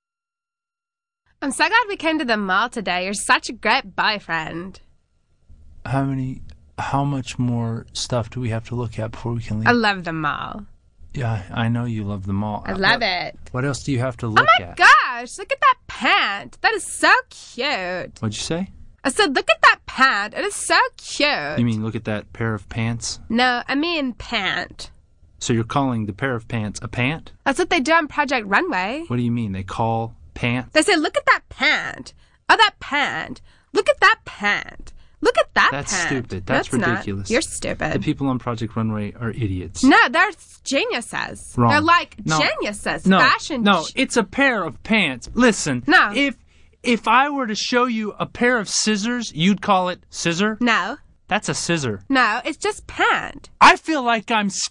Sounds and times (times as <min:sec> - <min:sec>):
Speech synthesizer: 0:01.4 - 0:04.8, 0:05.9 - 0:10.6, 0:11.2 - 0:46.3, 0:46.9 - 0:54.7.